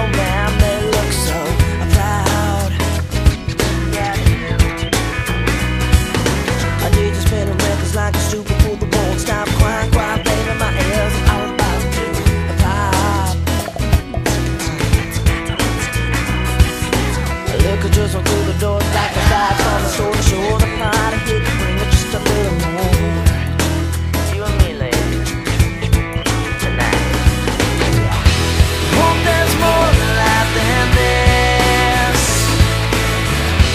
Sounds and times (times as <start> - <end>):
Music: 0.0 - 33.7.